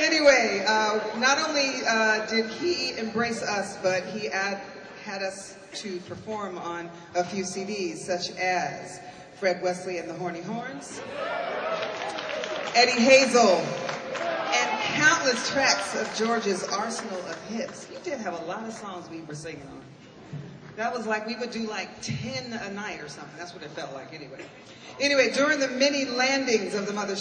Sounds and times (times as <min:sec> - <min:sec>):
Speech: 0:00.0 - 0:11.0, 0:14.6 - 0:19.9, 0:20.8 - 0:24.4, 0:25.0 - 0:27.2.